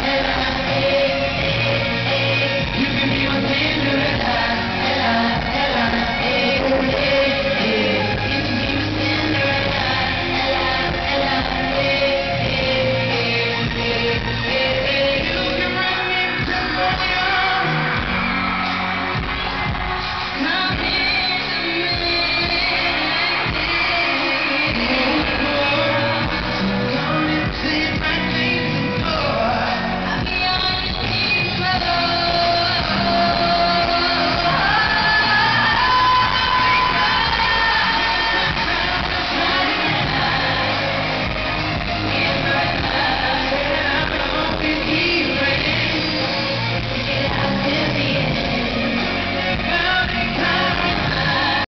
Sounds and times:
Music: 0.0 - 51.7.

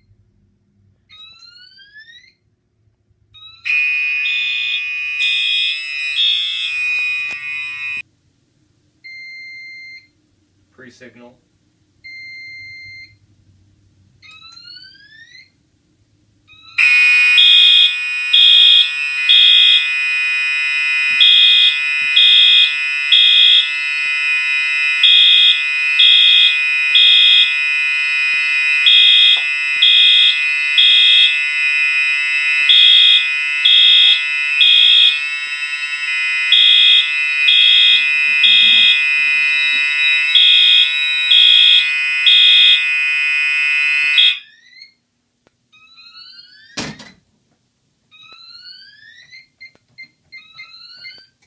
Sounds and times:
Fire alarm: 3.4 - 8.0, 16.6 - 45.0, 45.8 - 46.8, 48.1 - 51.4
Buzzer: 3.7 - 8.0, 16.8 - 44.6
Speech: 10.7 - 11.4.

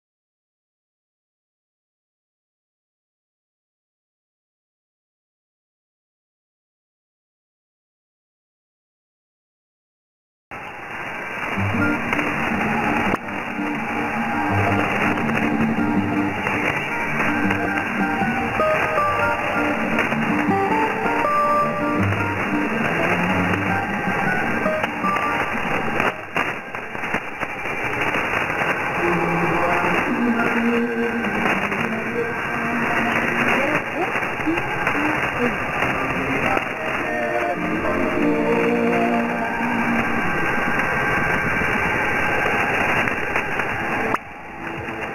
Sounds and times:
Music: 11.5 - 26.4, 29.0 - 34.0, 35.8 - 40.3
Speech: 29.0 - 39.6.

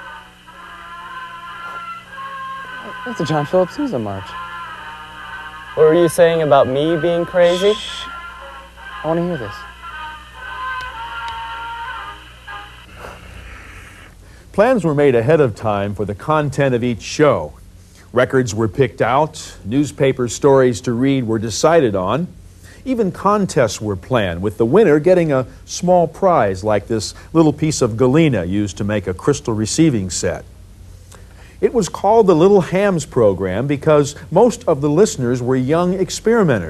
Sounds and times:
Music: 0.0 - 13.1
Speech: 5.8 - 8.1, 14.6 - 17.6, 18.2 - 30.5, 31.6 - 36.7
Radio: 6.5 - 8.2.

